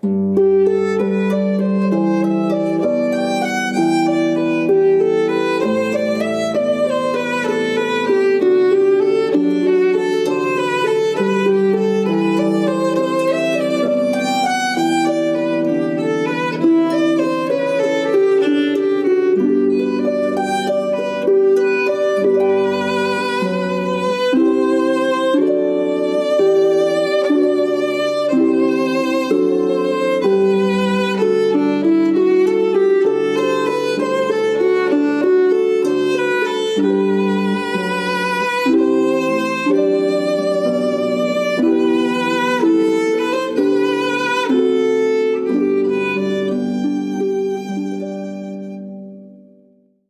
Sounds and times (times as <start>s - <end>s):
Violin, fiddle: 0.0s - 49.5s.